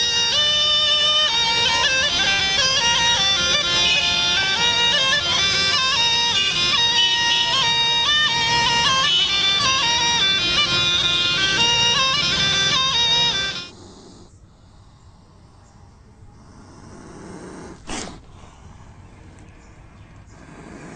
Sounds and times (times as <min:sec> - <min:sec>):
Music: 0:00.0 - 0:13.7.